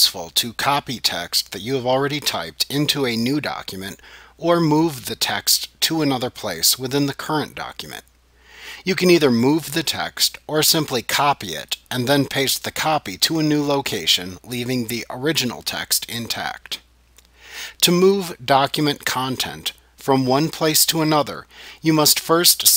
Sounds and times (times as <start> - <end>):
Narration, monologue: 0.0 - 22.7.